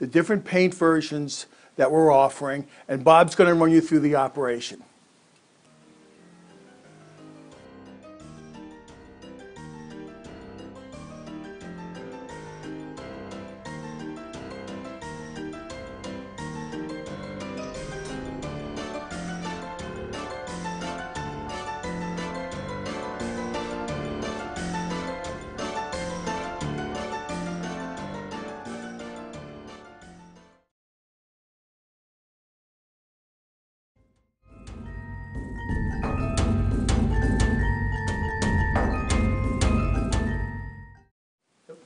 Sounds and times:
Speech: 0.0s - 4.9s
Music: 5.6s - 30.7s, 34.0s - 41.1s.

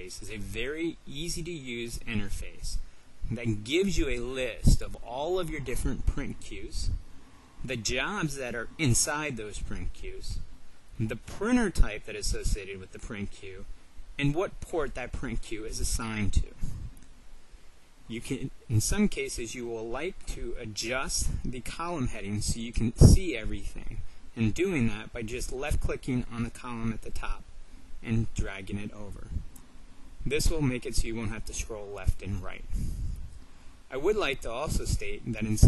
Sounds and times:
Speech: 0.0s - 7.0s, 7.6s - 10.4s, 11.0s - 16.7s, 18.1s - 29.4s, 30.2s - 32.8s, 33.9s - 35.6s.

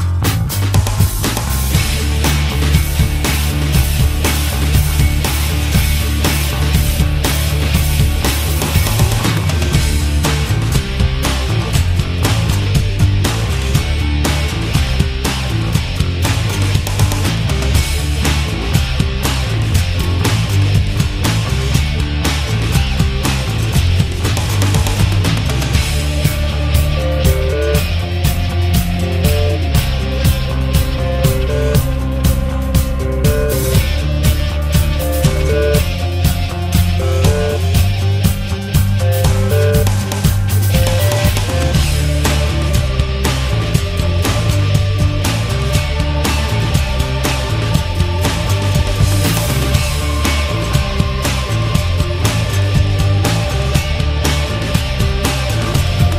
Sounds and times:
Music: 0.0s - 56.1s.

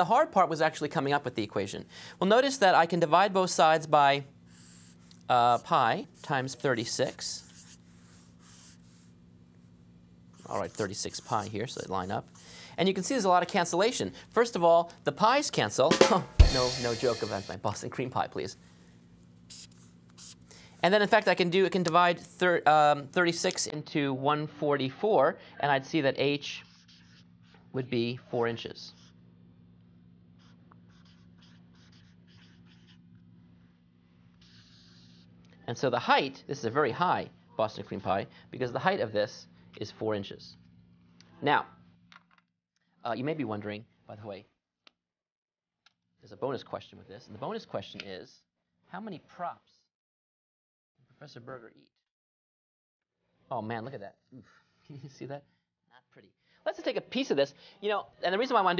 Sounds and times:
Drum kit: 15.9s - 17.6s.

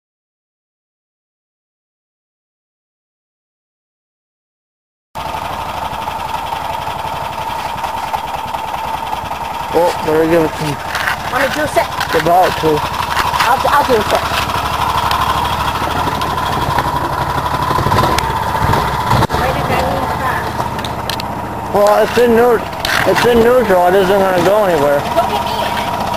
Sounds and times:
Car: 5.2s - 26.1s
Speech: 21.7s - 26.0s.

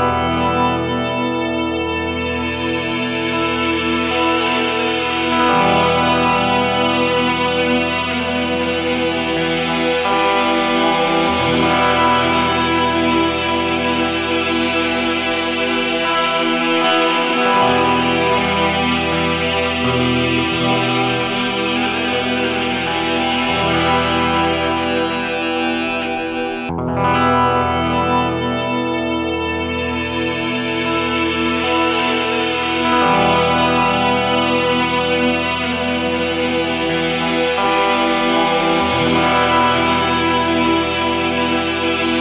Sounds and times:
Music: 0.0s - 42.2s.

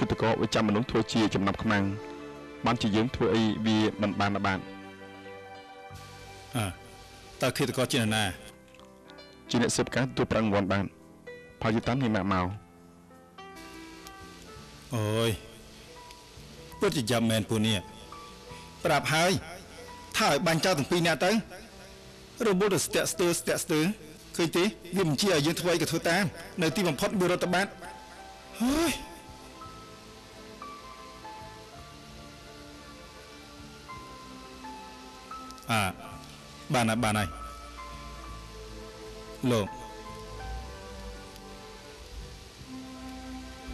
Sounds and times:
Speech: 0.0s - 2.0s, 2.6s - 4.6s, 6.6s - 6.8s, 7.4s - 8.4s, 9.5s - 10.9s, 11.6s - 12.6s, 14.9s - 15.4s, 16.8s - 17.9s, 18.8s - 19.4s, 20.2s - 21.5s, 22.4s - 27.8s, 28.6s - 29.1s, 35.7s - 36.1s, 36.7s - 37.4s, 39.4s - 39.8s
Music: 0.0s - 43.7s.

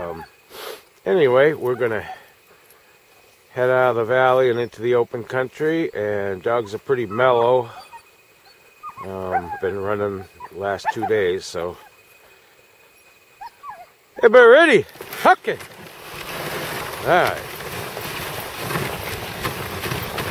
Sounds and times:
Speech: 0.0s - 0.3s, 1.0s - 2.2s, 3.5s - 7.8s, 9.0s - 11.9s, 14.2s - 15.6s, 17.0s - 17.4s
Yip: 0.0s - 0.3s, 13.4s - 13.9s
Whimper (dog): 7.0s - 11.9s, 13.0s - 14.0s.

